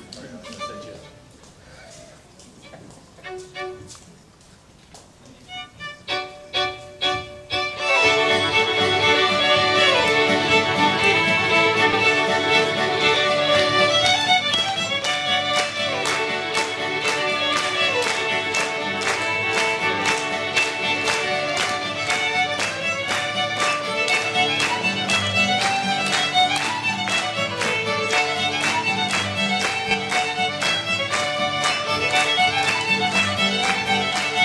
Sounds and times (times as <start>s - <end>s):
Violin, fiddle: 0.0s - 4.2s, 5.2s - 34.4s.